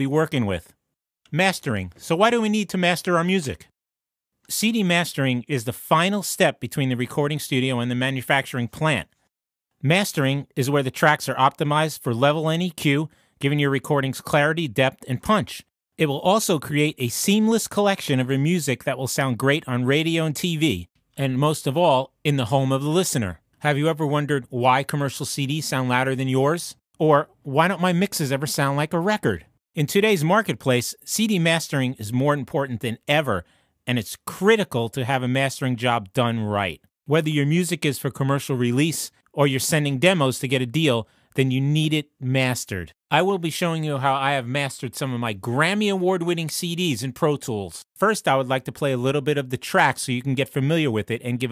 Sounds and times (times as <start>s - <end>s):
Speech: 0.0s - 3.8s, 4.5s - 9.2s, 9.8s - 51.5s.